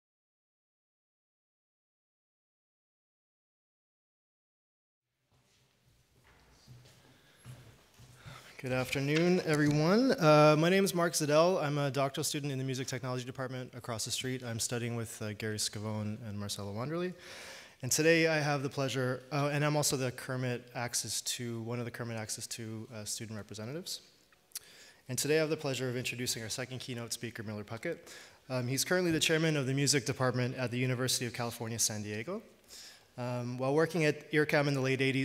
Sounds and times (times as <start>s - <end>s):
Speech: 8.6s - 17.2s, 17.8s - 24.1s, 25.1s - 32.5s, 33.2s - 35.2s.